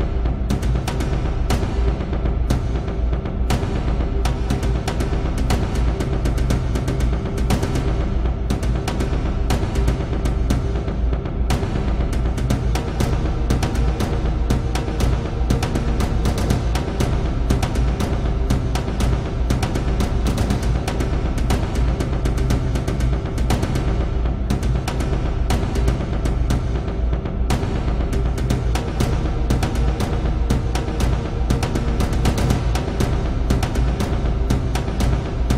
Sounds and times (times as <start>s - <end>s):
Music: 0.0s - 35.5s.